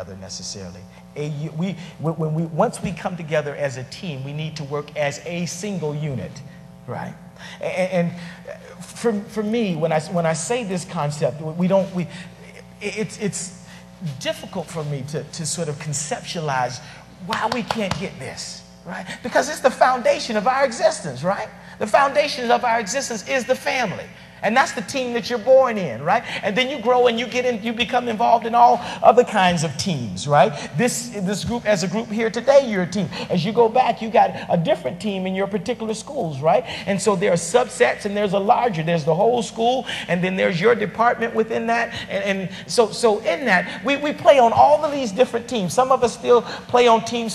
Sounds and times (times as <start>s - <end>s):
Male speech, man speaking: 0.0s - 47.3s
Narration, monologue: 0.0s - 47.3s.